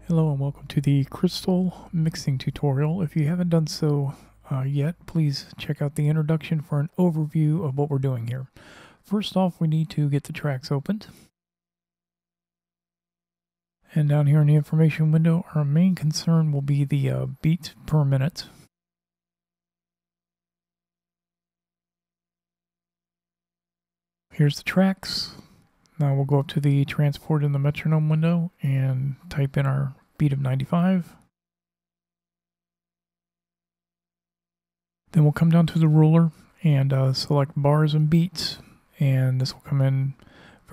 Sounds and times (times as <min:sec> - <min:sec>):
Speech: 0:00.0 - 0:11.2, 0:13.9 - 0:18.6, 0:24.4 - 0:31.2, 0:35.1 - 0:40.7.